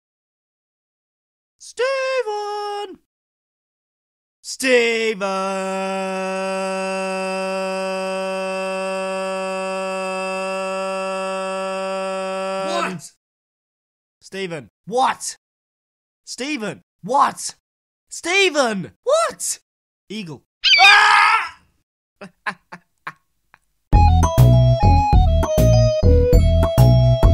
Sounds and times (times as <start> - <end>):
Speech: 1.6 - 3.1, 4.5 - 7.2, 12.6 - 13.2, 14.2 - 15.4, 16.3 - 20.5
Music: 23.9 - 27.3.